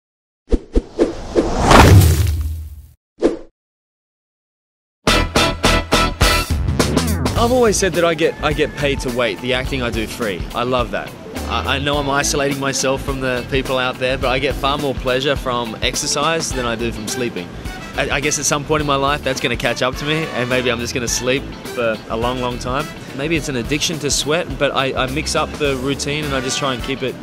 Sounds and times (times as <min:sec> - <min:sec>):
Music: 0:05.0 - 0:27.2
Speech: 0:07.4 - 0:27.2.